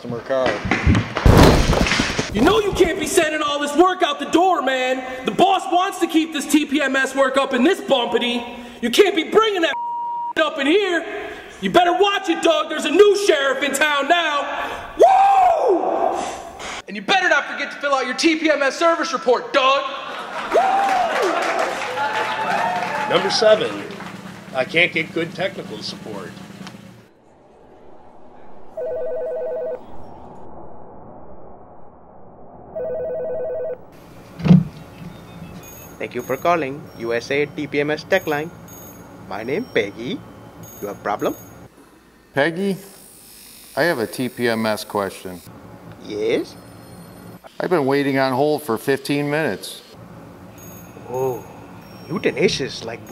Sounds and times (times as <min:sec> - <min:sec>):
Speech: 0:02.4 - 0:09.8, 0:10.4 - 0:14.5, 0:16.9 - 0:20.0, 0:24.5 - 0:26.3, 0:36.0 - 0:38.5, 0:39.3 - 0:40.2, 0:43.8 - 0:46.6, 0:47.5 - 0:49.9, 0:52.1 - 0:53.1
Outside, rural or natural: 0:26.3 - 0:35.9.